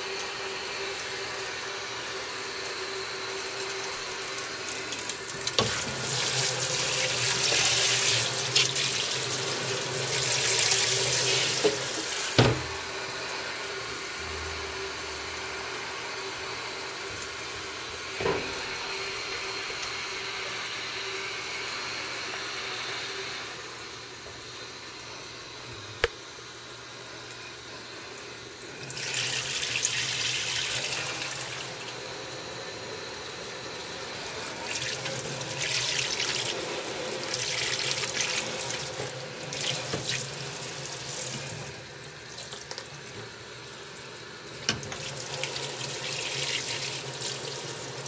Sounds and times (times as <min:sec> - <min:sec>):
Water tap, faucet: 0:00.0 - 0:14.2, 0:15.1 - 0:23.5, 0:28.0 - 0:48.0
Sink (filling or washing): 0:00.0 - 0:23.5, 0:28.0 - 0:48.0.